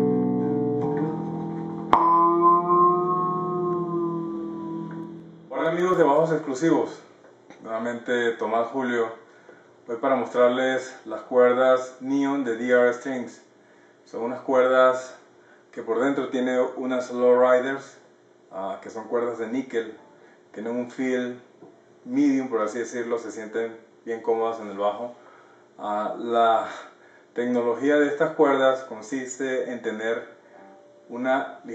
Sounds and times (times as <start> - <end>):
Music: 0.0 - 6.0, 30.5 - 31.1
Speech: 5.5 - 9.2, 9.9 - 13.5, 14.1 - 21.5, 22.1 - 25.2, 25.8 - 30.4, 31.1 - 31.7.